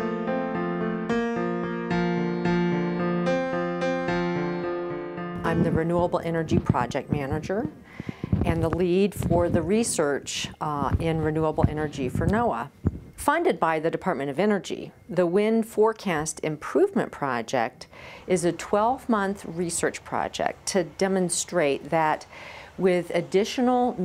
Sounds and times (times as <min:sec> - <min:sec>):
Speech: 0:05.4 - 0:07.8, 0:08.4 - 0:24.0.